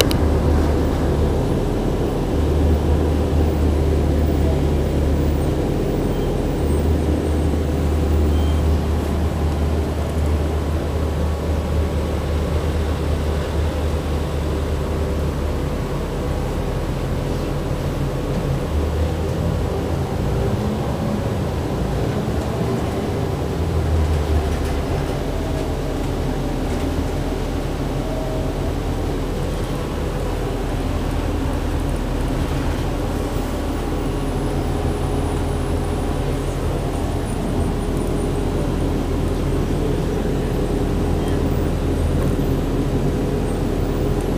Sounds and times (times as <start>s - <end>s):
Bus: 0.0s - 44.3s.